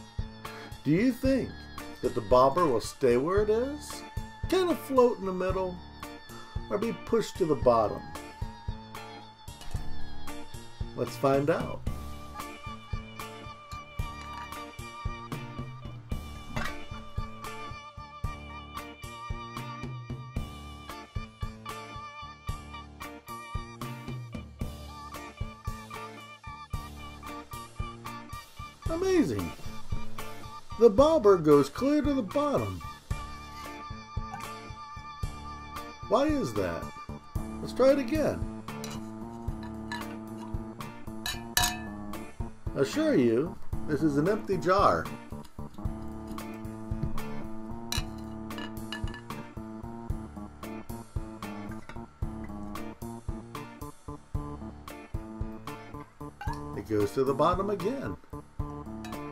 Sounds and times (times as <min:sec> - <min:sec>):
Music: 0:00.0 - 0:59.3
Speech: 0:00.9 - 0:05.8, 0:06.7 - 0:08.0, 0:11.0 - 0:11.8, 0:28.9 - 0:29.6, 0:30.8 - 0:32.8, 0:36.1 - 0:36.9, 0:37.6 - 0:38.4, 0:42.8 - 0:45.2, 0:56.8 - 0:58.2.